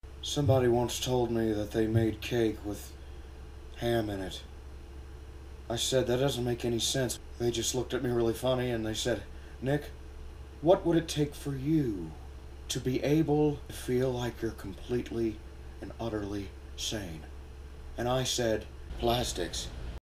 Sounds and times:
Speech: 0.2 - 3.0, 3.8 - 4.5, 5.7 - 10.0, 10.6 - 17.3, 18.0 - 19.8.

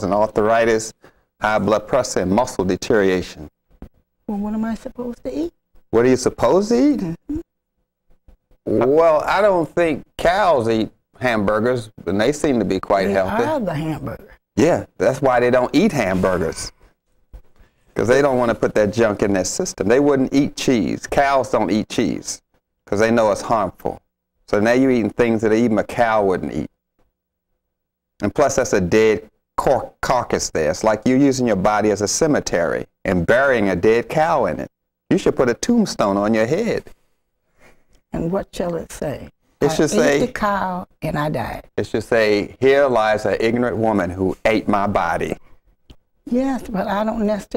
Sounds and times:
Conversation: 0.0 - 47.5.

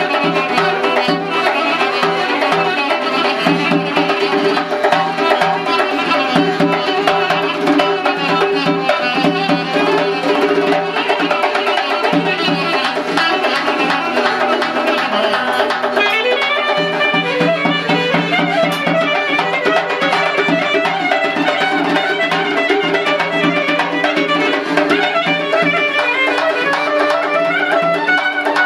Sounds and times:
Clarinet: 0.0 - 28.6.

